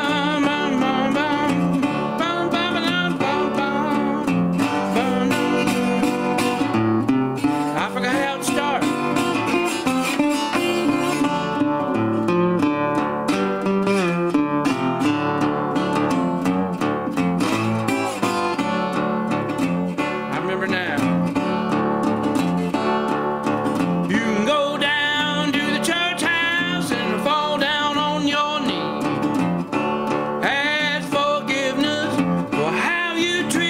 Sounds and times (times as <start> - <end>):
Steel guitar, slide guitar: 0.0 - 33.6.